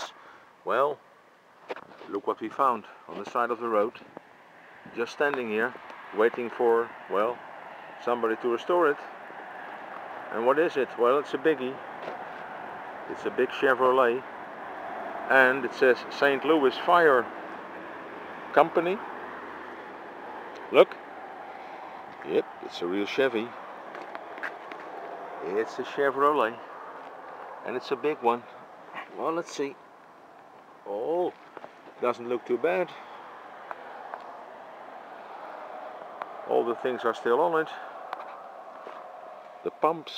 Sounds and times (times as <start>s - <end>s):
Speech: 0.0s - 1.0s, 2.0s - 4.0s, 4.9s - 7.4s, 8.0s - 9.1s, 10.3s - 11.8s, 13.1s - 14.3s, 15.3s - 17.3s, 18.5s - 19.0s, 20.7s - 21.0s, 22.2s - 23.6s, 25.4s - 26.7s, 27.6s - 29.8s, 30.8s - 31.4s, 32.0s - 33.0s, 36.5s - 37.9s, 39.6s - 40.1s.